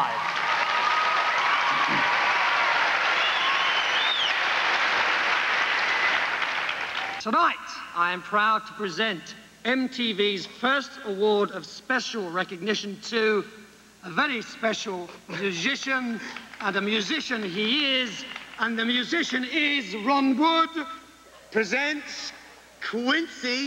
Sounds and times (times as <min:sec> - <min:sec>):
Speech: 0:07.2 - 0:23.6.